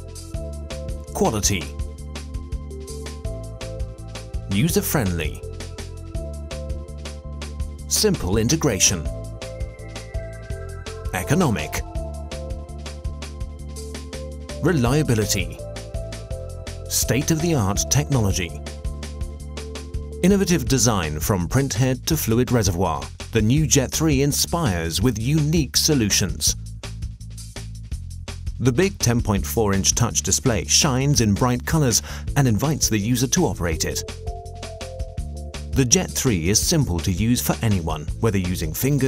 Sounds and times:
Music: 0:00.0 - 0:39.0
Speech: 0:01.1 - 0:01.8, 0:04.5 - 0:05.4, 0:07.9 - 0:09.1, 0:11.1 - 0:11.9, 0:14.6 - 0:15.6, 0:16.9 - 0:18.6, 0:20.2 - 0:26.6, 0:28.6 - 0:34.1, 0:35.8 - 0:39.0.

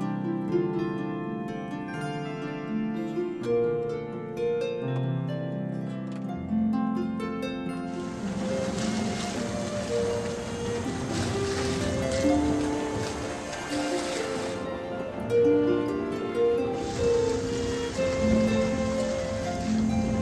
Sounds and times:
Harp: 0:00.0 - 0:20.2
Pizzicato: 0:00.0 - 0:20.2.

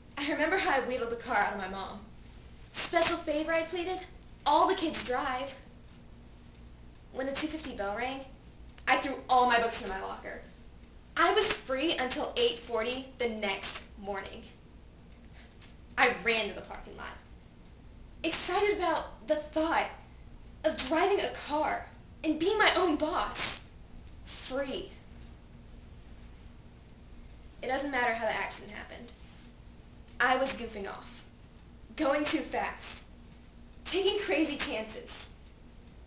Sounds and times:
Narration, monologue: 0:00.0 - 0:36.0.

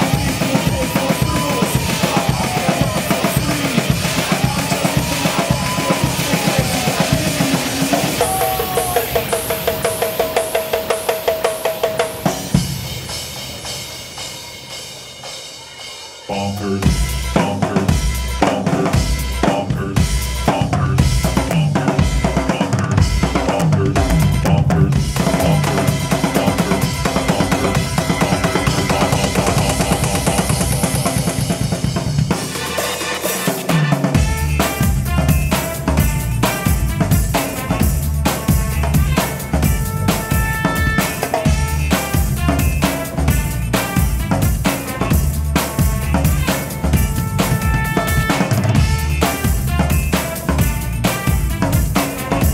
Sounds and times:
Bass drum: 0:00.0 - 0:09.5, 0:16.6 - 0:32.4, 0:34.1 - 0:52.5
Drum kit: 0:00.0 - 0:52.5
Drum roll: 0:00.0 - 0:52.5.

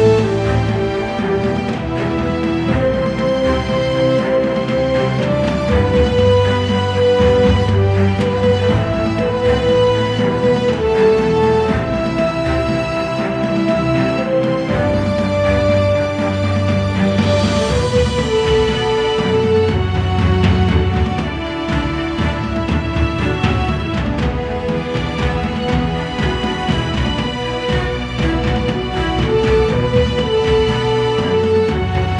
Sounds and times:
Theme music: 0:00.0 - 0:32.1.

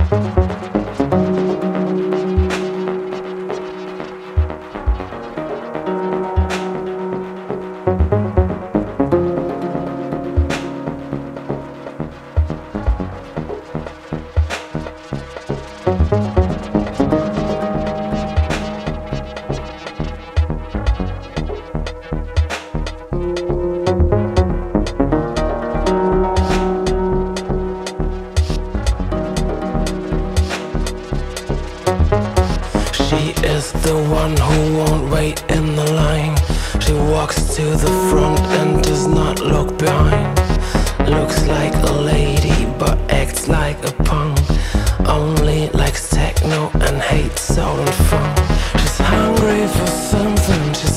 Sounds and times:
Synthesizer: 0:00.0 - 0:50.9.

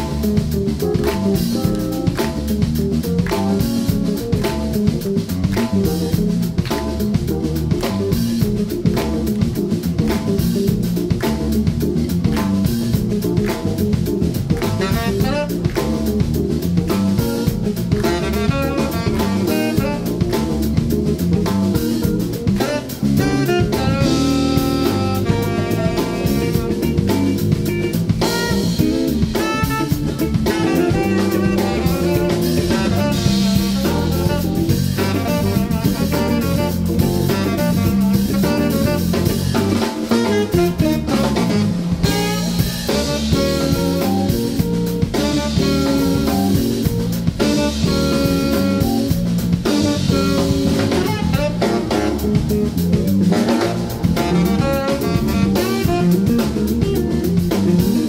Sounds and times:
Music: 0:00.0 - 0:58.0.

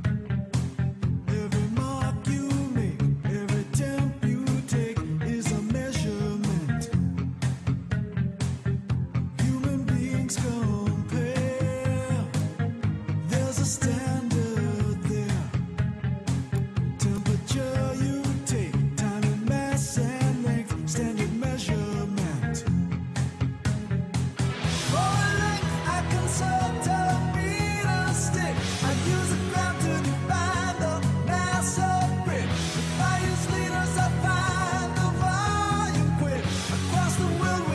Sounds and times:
Music: 0:00.0 - 0:37.7.

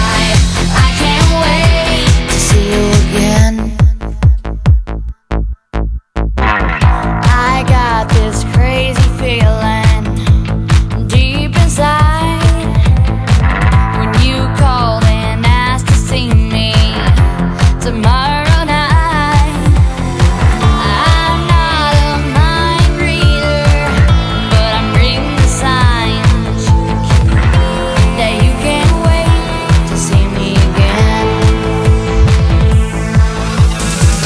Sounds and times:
Trance music: 0:00.0 - 0:04.4, 0:06.4 - 0:34.2
Pop music: 0:00.0 - 0:04.8, 0:06.4 - 0:34.2.

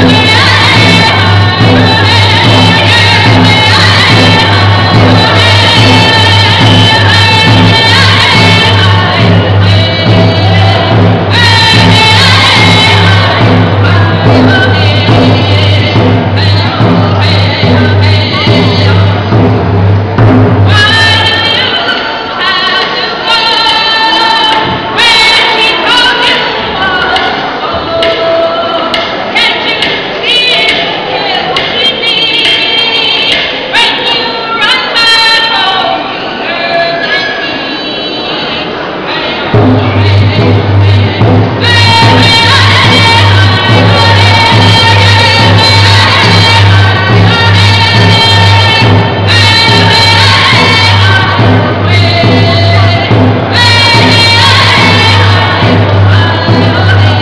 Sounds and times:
Music: 0:00.0 - 0:57.2.

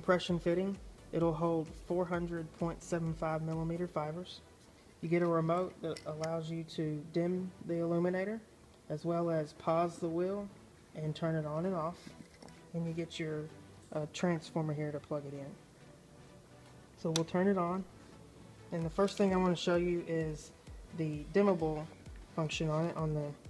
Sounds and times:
Speech: 0:00.0 - 0:04.4, 0:05.0 - 0:12.1, 0:12.7 - 0:15.6, 0:17.0 - 0:17.9, 0:18.7 - 0:23.4
Music: 0:00.0 - 0:23.4.

